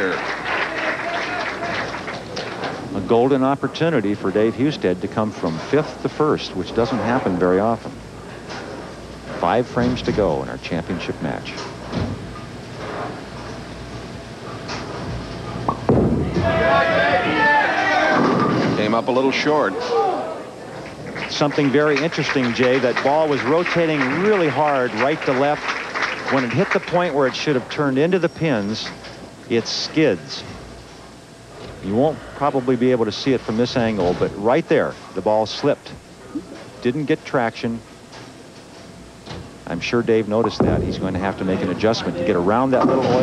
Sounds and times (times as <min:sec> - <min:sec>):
Speech: 0:02.9 - 0:08.0, 0:09.3 - 0:11.7, 0:18.8 - 0:20.3, 0:21.3 - 0:25.7, 0:26.3 - 0:30.6, 0:31.8 - 0:36.0, 0:36.8 - 0:37.9, 0:39.6 - 0:43.2.